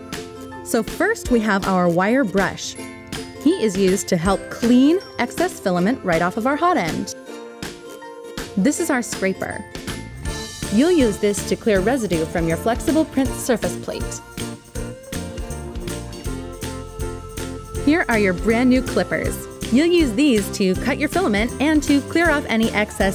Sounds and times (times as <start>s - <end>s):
Music: 0.0s - 23.1s
Speech: 0.7s - 2.8s, 3.4s - 7.1s, 8.6s - 9.7s, 10.7s - 14.2s, 17.8s - 23.1s.